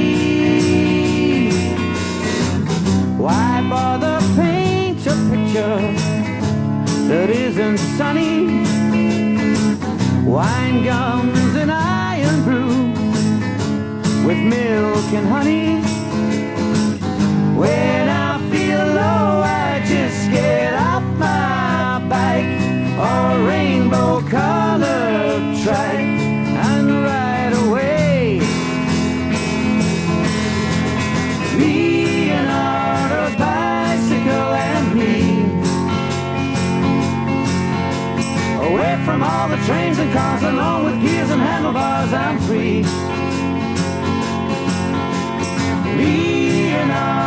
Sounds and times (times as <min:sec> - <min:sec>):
Music: 0:00.0 - 0:47.2.